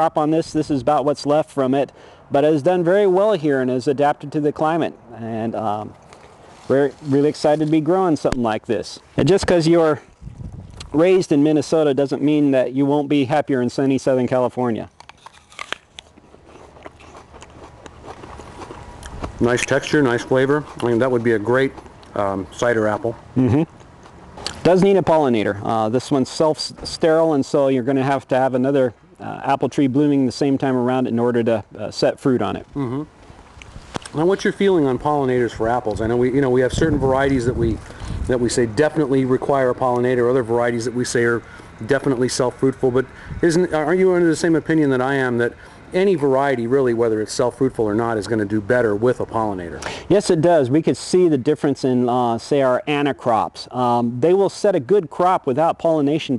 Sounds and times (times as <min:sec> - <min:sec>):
Speech: 0:00.0 - 0:06.0, 0:06.7 - 0:10.0, 0:10.9 - 0:14.9, 0:19.4 - 0:23.7, 0:24.6 - 0:33.1, 0:34.1 - 0:56.3
Outside, urban or manmade: 0:00.0 - 0:56.3
Biting: 0:15.0 - 0:19.4.